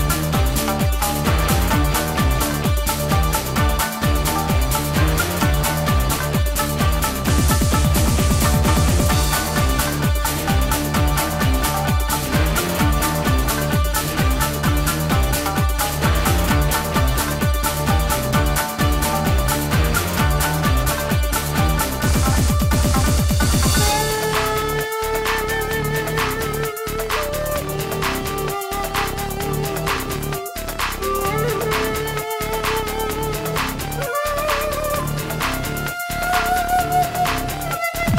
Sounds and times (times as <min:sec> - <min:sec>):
Music: 0:00.0 - 0:38.1.